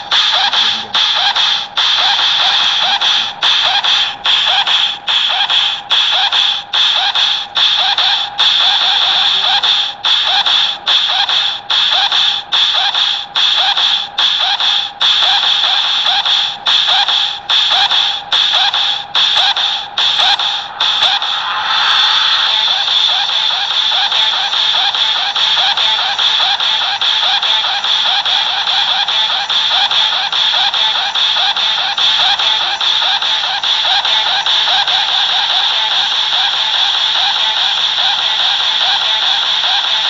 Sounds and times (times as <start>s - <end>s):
Music: 0.0s - 40.1s.